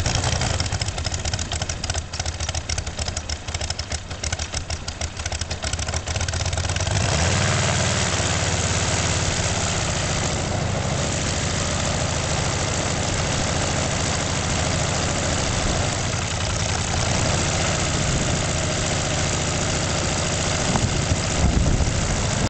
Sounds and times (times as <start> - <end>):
Idling: 0.0 - 22.5
Vehicle: 0.0 - 22.5.